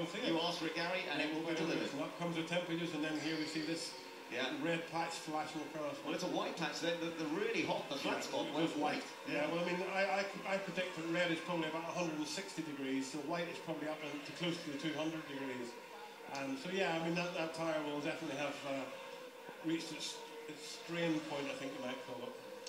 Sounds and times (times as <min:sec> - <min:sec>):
Speech: 0:00.0 - 0:18.9, 0:19.6 - 0:22.4.